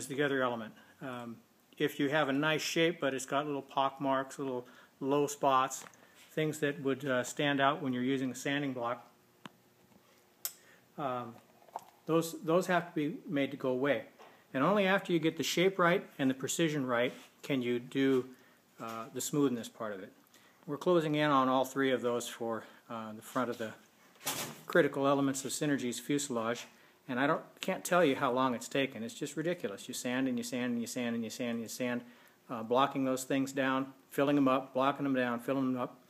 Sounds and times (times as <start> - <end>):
Speech: 0.0 - 9.1, 11.0 - 11.4, 12.1 - 23.8, 24.7 - 36.0.